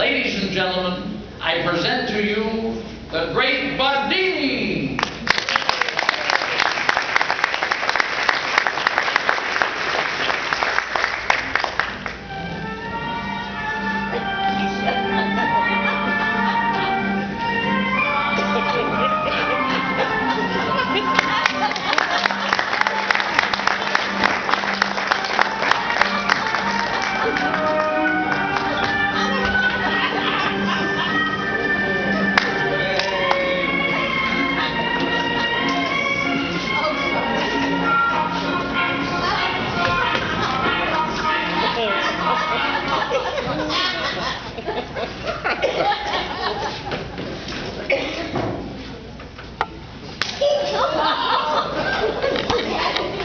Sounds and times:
Music: 0:00.0 - 0:44.6
Inside, large room or hall: 0:00.0 - 0:53.2.

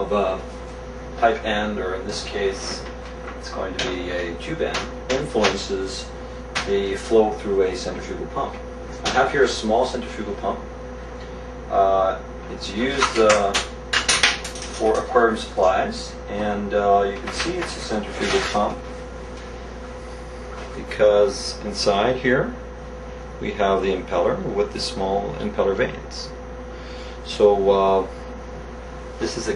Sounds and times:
Speech: 0:00.0 - 0:00.5, 0:01.2 - 0:10.7, 0:11.7 - 0:13.7, 0:14.7 - 0:18.9, 0:20.8 - 0:22.6, 0:23.4 - 0:26.4, 0:27.2 - 0:28.2, 0:29.2 - 0:29.5.

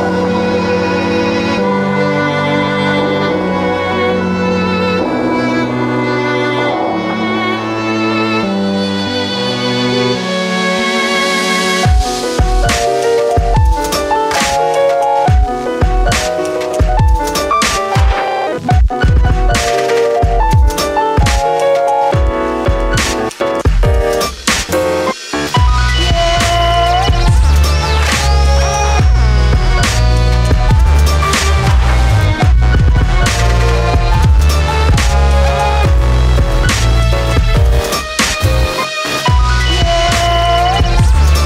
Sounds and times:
Violin, fiddle: 0:00.0 - 0:12.8, 0:25.6 - 0:41.4.

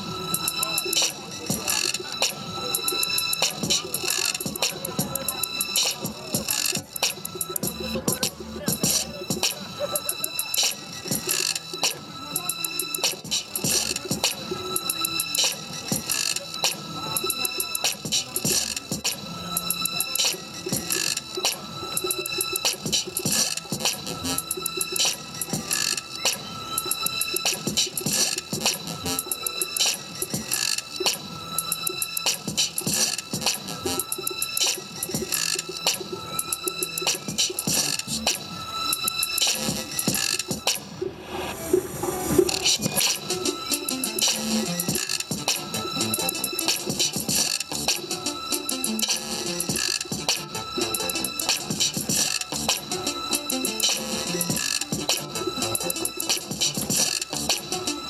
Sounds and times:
Music: 0:00.0 - 0:58.0.

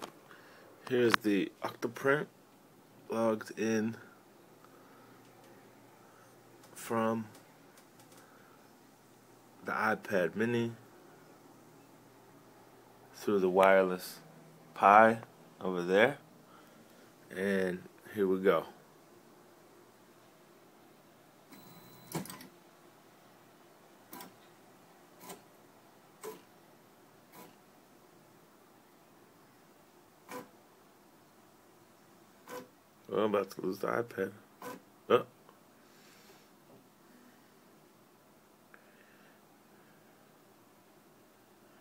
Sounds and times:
Speech: 0:00.9 - 0:02.3, 0:03.1 - 0:04.1, 0:06.8 - 0:07.4, 0:09.6 - 0:10.8, 0:13.1 - 0:14.2, 0:14.8 - 0:16.2, 0:17.3 - 0:18.8, 0:33.1 - 0:34.4, 0:35.1 - 0:35.3.

